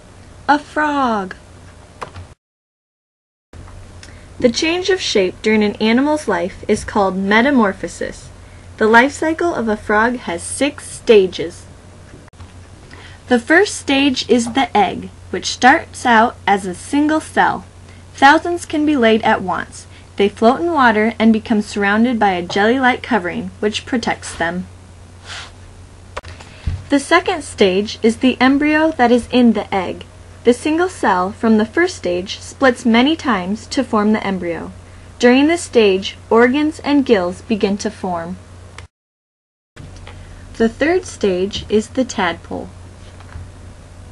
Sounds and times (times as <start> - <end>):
Speech: 0.5 - 1.4, 4.4 - 11.7, 13.3 - 24.7, 26.9 - 38.4, 40.6 - 42.8.